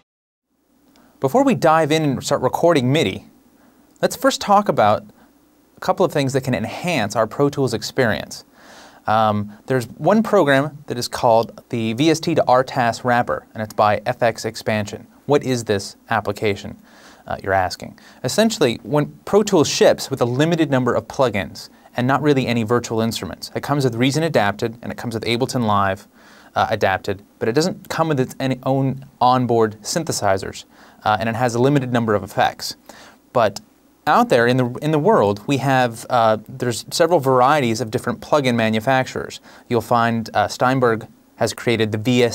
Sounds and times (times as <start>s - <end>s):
Speech: 1.2s - 3.4s, 4.0s - 5.2s, 5.8s - 42.3s.